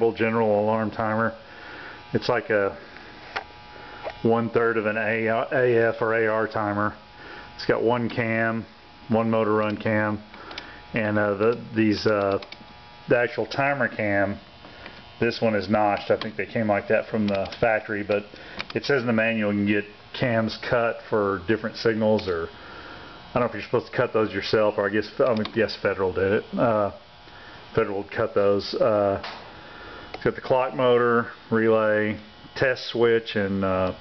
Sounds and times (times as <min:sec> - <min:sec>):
Speech: 0:00.0 - 0:01.4, 0:02.1 - 0:02.8, 0:04.2 - 0:07.0, 0:07.6 - 0:10.3, 0:11.0 - 0:12.5, 0:13.1 - 0:14.4, 0:15.2 - 0:22.6, 0:23.4 - 0:27.0, 0:27.8 - 0:29.3, 0:30.2 - 0:34.0.